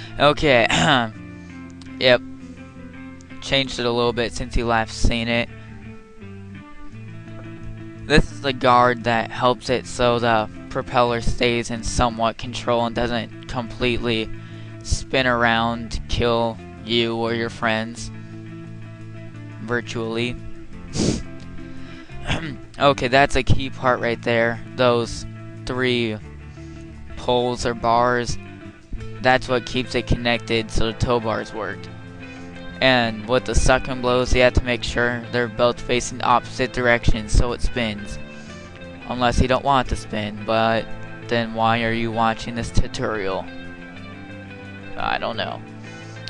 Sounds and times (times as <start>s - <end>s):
Music: 0.0s - 46.3s
Speech: 0.2s - 1.2s, 1.9s - 2.2s, 3.4s - 5.5s, 8.1s - 18.1s, 19.6s - 20.4s, 22.3s - 26.2s, 27.2s - 28.4s, 29.2s - 31.9s, 32.8s - 38.2s, 39.1s - 43.5s, 44.9s - 45.6s.